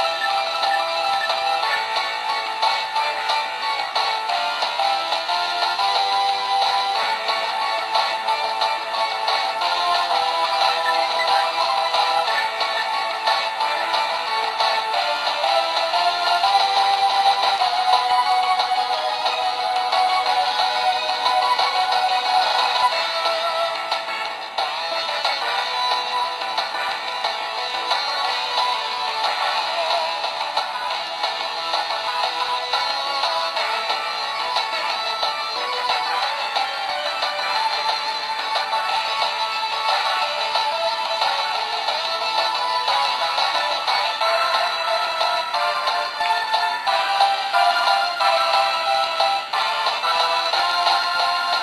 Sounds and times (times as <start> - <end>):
Video game music: 0.0 - 51.6.